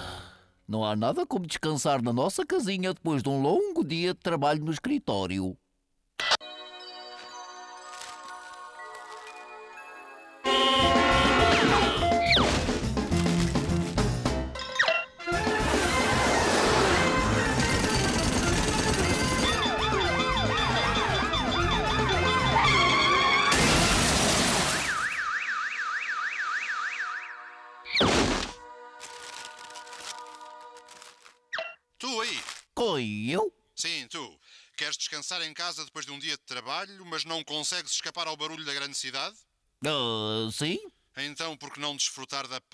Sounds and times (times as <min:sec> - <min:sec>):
Music: 0:06.4 - 0:23.5, 0:28.6 - 0:31.2.